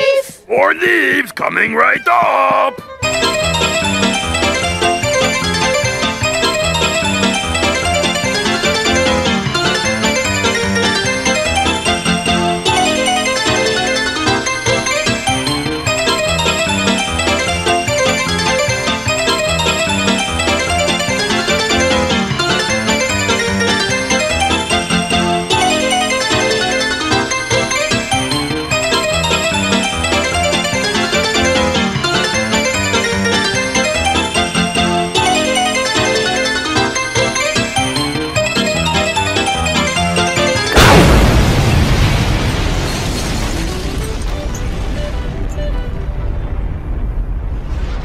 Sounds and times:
Music: 0:00.0 - 0:42.2, 0:43.3 - 0:47.2.

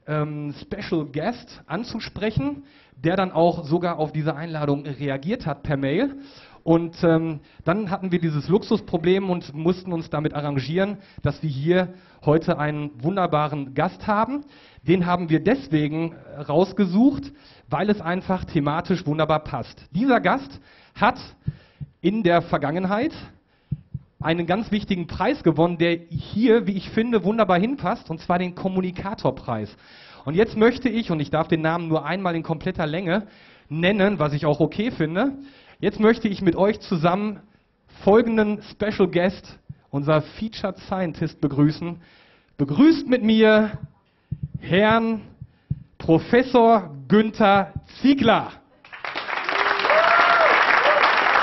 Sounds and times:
Speech: 0:00.0 - 0:21.4, 0:22.0 - 0:23.4, 0:24.2 - 0:42.0, 0:42.6 - 0:43.9, 0:44.6 - 0:45.4, 0:46.0 - 0:48.7.

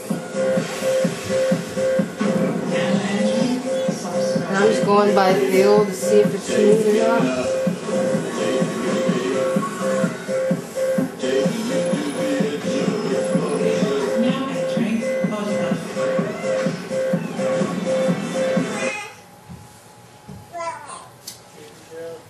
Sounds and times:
Music: 0:00.0 - 0:19.0.

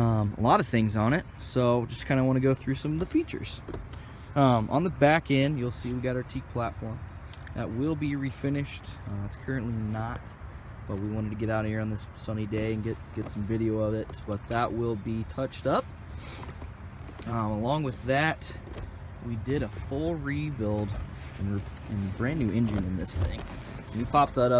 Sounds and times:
Speech: 0:00.0 - 0:03.6, 0:04.4 - 0:15.9, 0:17.2 - 0:18.6, 0:19.2 - 0:24.5.

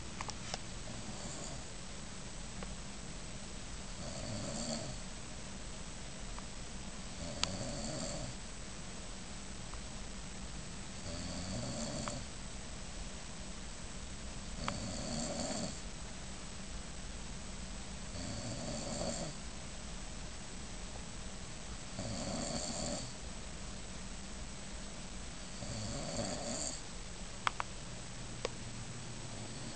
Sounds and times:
Snoring: 0:00.9 - 0:01.7, 0:04.0 - 0:05.0, 0:07.1 - 0:08.4, 0:11.0 - 0:12.3, 0:14.6 - 0:15.8, 0:18.1 - 0:19.4, 0:22.0 - 0:23.2, 0:25.5 - 0:26.8, 0:29.3 - 0:29.7.

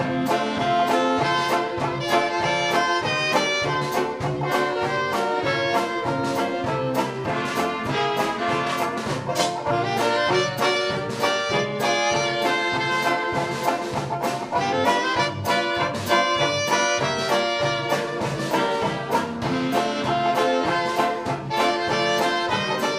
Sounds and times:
Jazz: 0:00.0 - 0:22.9
Orchestra: 0:00.0 - 0:22.9.

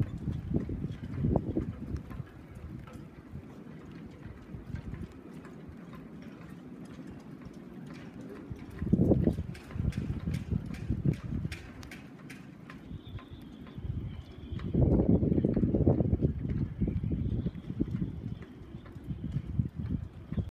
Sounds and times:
Wind noise (microphone): 0:00.0 - 0:05.2, 0:08.5 - 0:20.5.

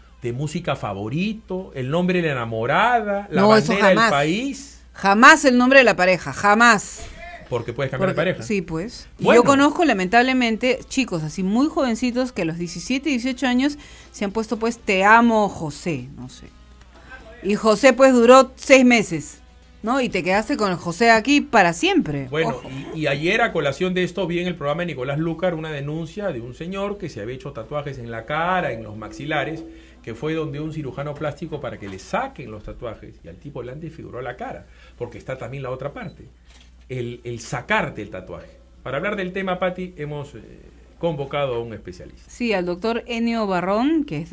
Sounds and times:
Speech: 0:00.2 - 0:16.5, 0:19.9 - 0:36.3, 0:36.9 - 0:44.3.

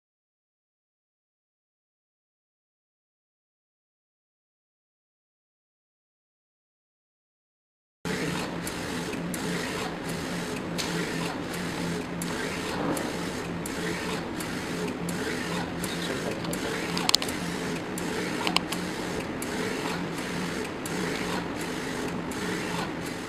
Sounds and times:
Printer: 0:08.1 - 0:23.2.

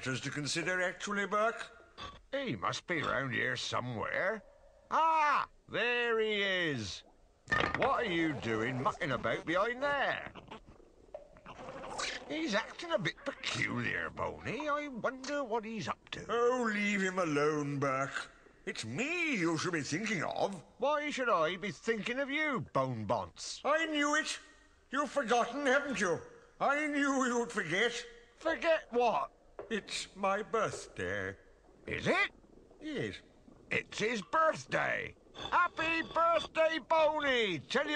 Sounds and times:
Speech: 0:00.0 - 0:01.7, 0:02.3 - 0:07.1, 0:07.8 - 0:10.4, 0:12.0 - 0:37.9.

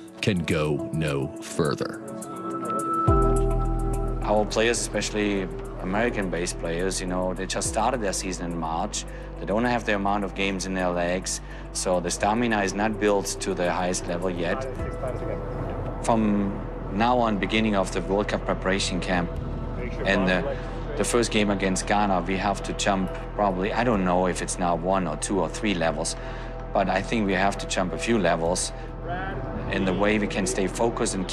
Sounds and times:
Music: 0:00.0 - 0:31.3
Speech: 0:00.2 - 0:02.0, 0:04.2 - 0:15.4, 0:16.0 - 0:26.2, 0:26.8 - 0:31.3.

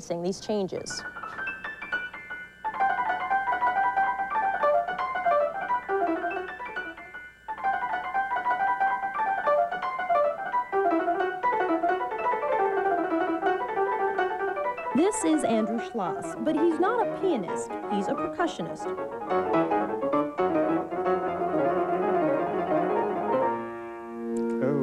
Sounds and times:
Speech: 0:00.0 - 0:01.0, 0:15.0 - 0:18.9
Musical instrument: 0:02.7 - 0:24.8.

